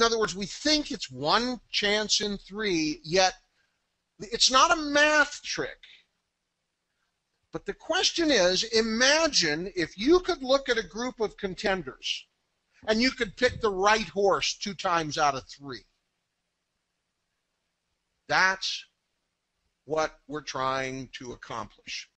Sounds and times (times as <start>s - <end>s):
Speech: 0.0s - 3.4s, 4.2s - 6.0s, 7.6s - 12.3s, 12.9s - 15.9s, 18.3s - 19.0s, 19.9s - 22.1s.